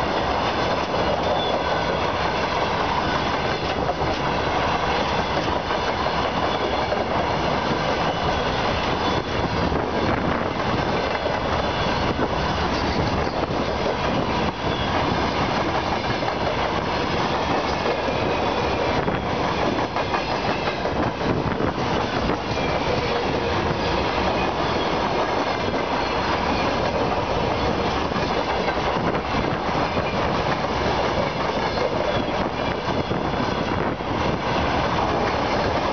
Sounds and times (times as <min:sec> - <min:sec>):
Train: 0:00.0 - 0:35.9.